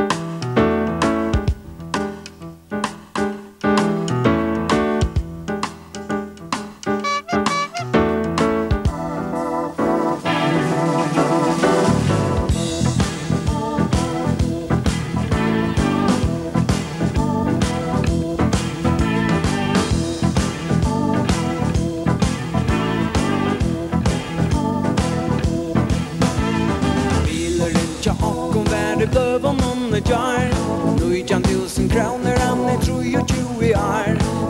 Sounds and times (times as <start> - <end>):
Music: 0.0 - 34.5.